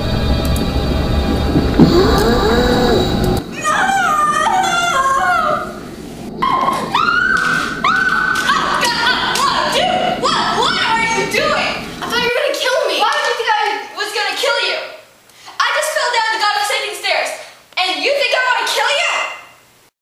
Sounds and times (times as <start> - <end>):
Speech: 8.5 - 19.5.